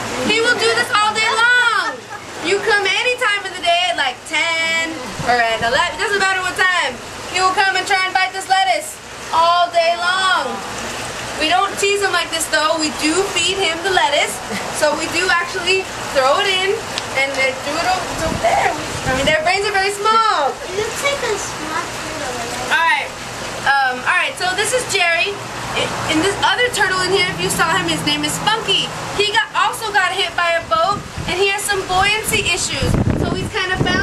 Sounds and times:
Speech: 23.7 - 34.0.

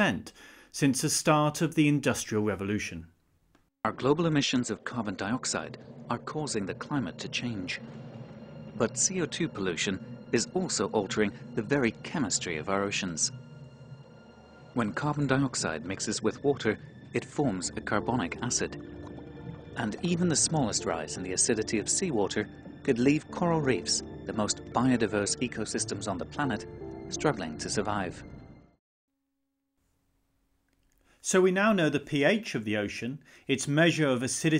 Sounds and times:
Speech: 0.0 - 3.1, 3.8 - 7.8, 8.8 - 13.4, 14.8 - 18.8, 19.8 - 28.2, 31.2 - 34.5
Music: 5.0 - 28.8.

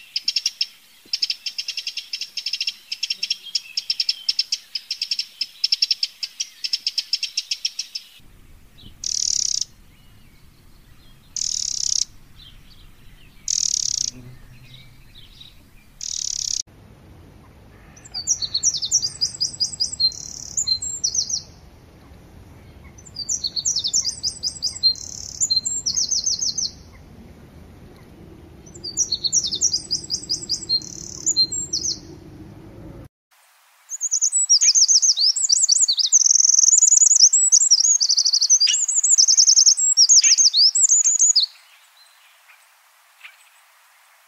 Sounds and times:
Chirp, tweet: 0.0 - 16.6, 18.0 - 21.6, 22.6 - 27.0, 28.7 - 32.2, 34.0 - 42.6.

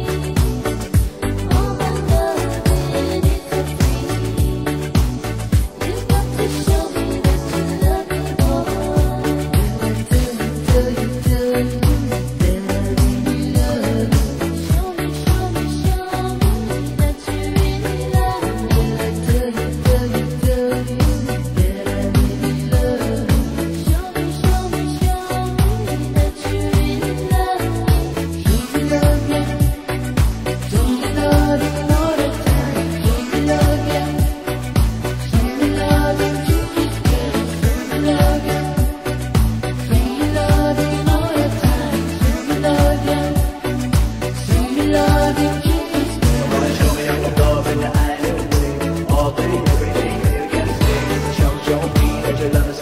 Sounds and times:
Pop music: 0.0 - 52.8.

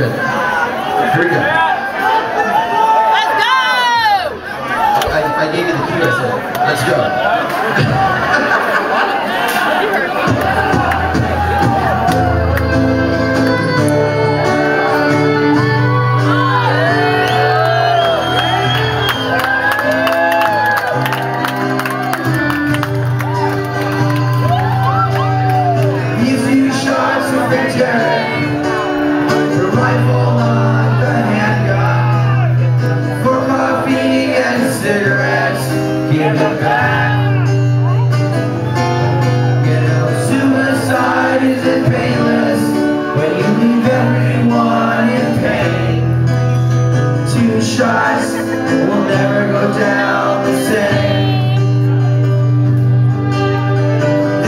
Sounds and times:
Music: 10.2 - 54.4.

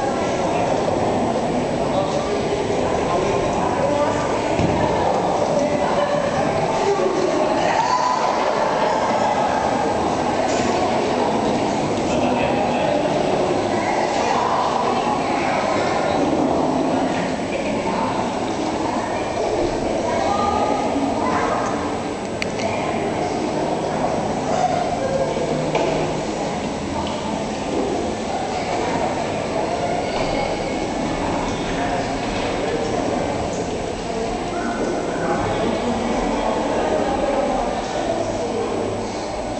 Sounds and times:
Speech: 0.0 - 39.5.

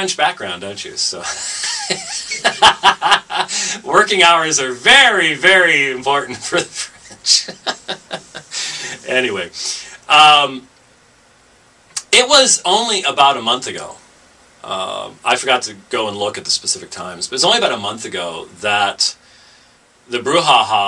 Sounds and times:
Speech: 0.0 - 1.4, 3.8 - 7.8, 9.0 - 10.7, 12.0 - 14.0, 14.6 - 19.2, 20.1 - 20.8.

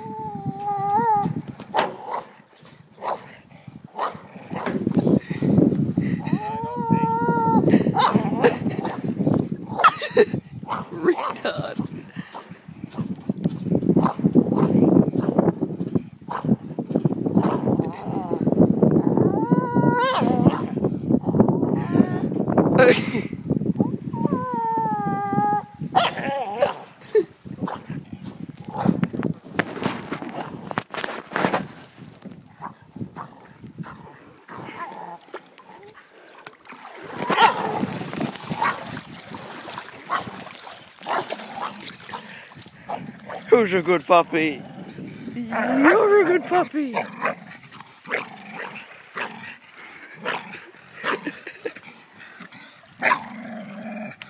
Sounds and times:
Bow-wow: 4.0 - 4.7, 8.0 - 8.2, 26.0 - 26.8, 37.3 - 37.6, 41.1 - 41.7.

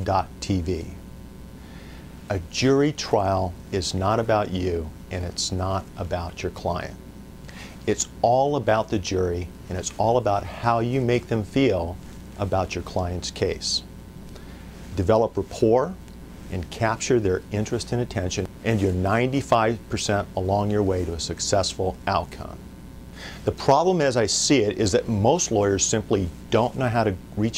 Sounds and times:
Speech: 0.0 - 1.0, 2.3 - 7.0, 7.8 - 13.9, 14.9 - 22.6, 23.4 - 27.5.

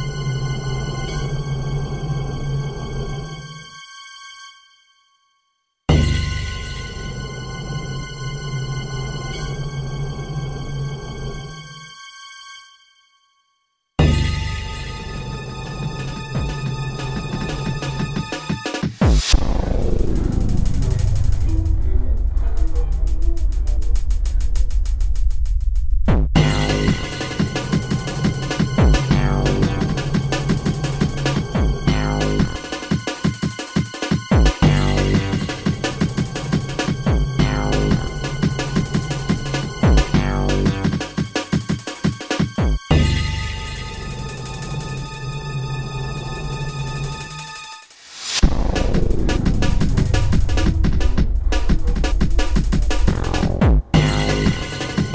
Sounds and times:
Music: 0.0 - 55.1.

